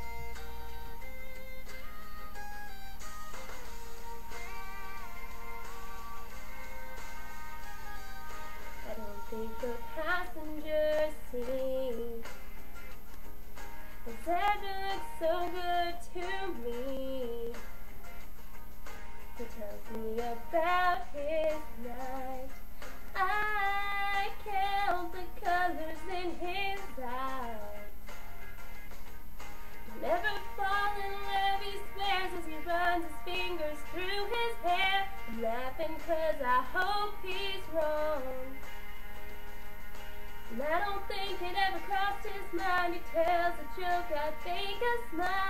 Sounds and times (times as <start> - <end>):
Female singing: 8.8 - 12.3, 14.1 - 17.6, 19.4 - 22.5, 23.2 - 27.9, 29.9 - 38.6, 40.5 - 45.4.